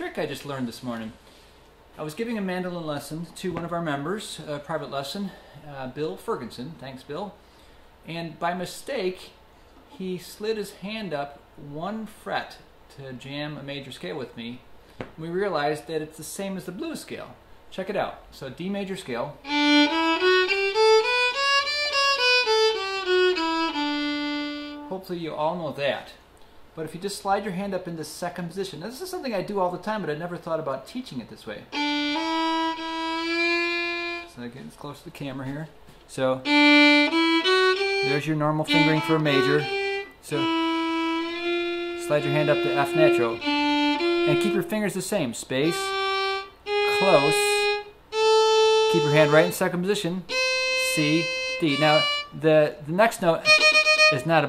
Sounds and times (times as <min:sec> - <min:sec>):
Speech: 0:00.0 - 0:01.2, 0:02.0 - 0:07.4, 0:08.0 - 0:09.4, 0:10.0 - 0:19.4, 0:24.9 - 0:26.2, 0:26.8 - 0:31.8, 0:34.3 - 0:36.5, 0:38.0 - 0:40.5, 0:42.0 - 0:43.4, 0:44.3 - 0:46.0, 0:46.9 - 0:47.8, 0:48.9 - 0:53.5, 0:54.1 - 0:54.4
Violin, fiddle: 0:19.4 - 0:24.9, 0:31.7 - 0:34.4, 0:36.4 - 0:45.0, 0:45.6 - 0:52.4, 0:53.4 - 0:54.4.